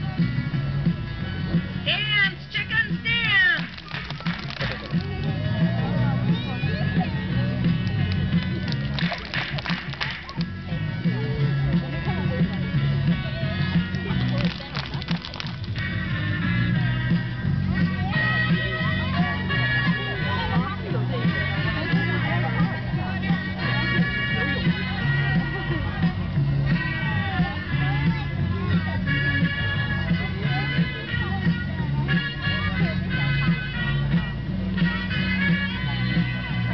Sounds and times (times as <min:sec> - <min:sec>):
Music: 0:00.0 - 0:36.7
Speech: 0:17.8 - 0:26.4.